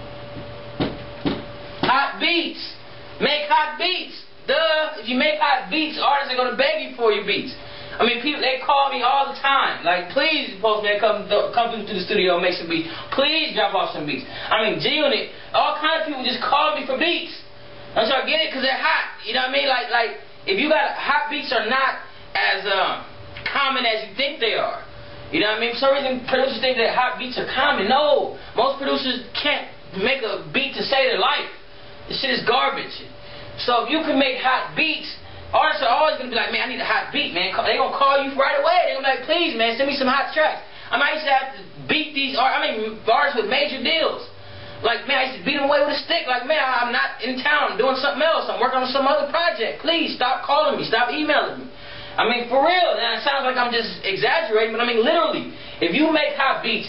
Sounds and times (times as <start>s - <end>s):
Speech: 1.8s - 56.8s.